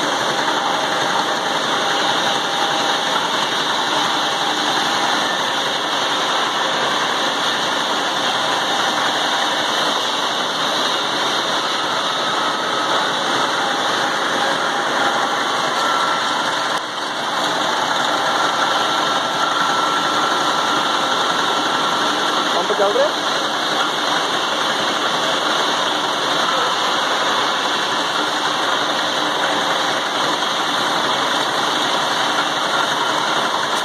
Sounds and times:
Engine: 0.0 - 33.8.

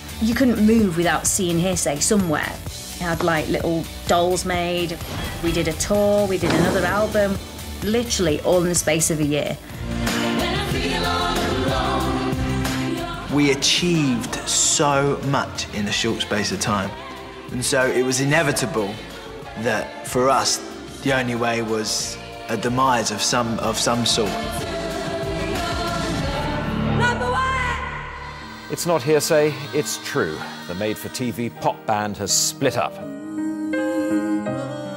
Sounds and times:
Music: 0.0 - 34.9.

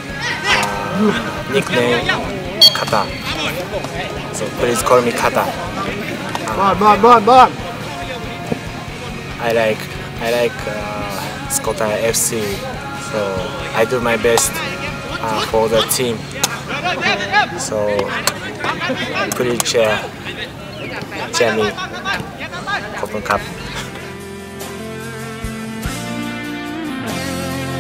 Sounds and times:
Music: 0.0 - 17.6, 23.0 - 27.8
Outside, urban or manmade: 0.0 - 27.8.

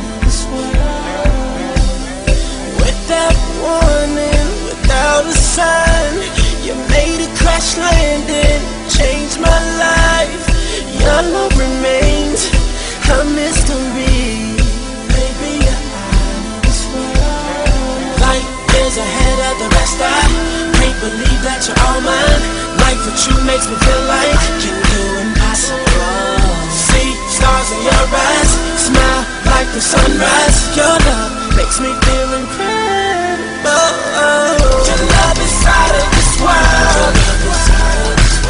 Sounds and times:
Music: 0.0 - 38.5.

